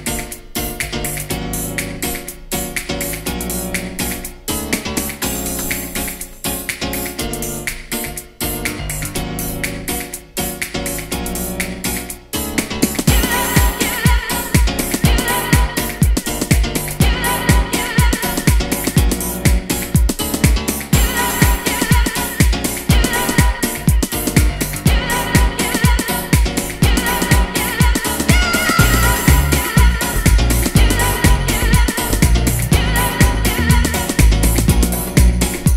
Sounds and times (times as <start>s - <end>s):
Music: 0.0s - 35.7s.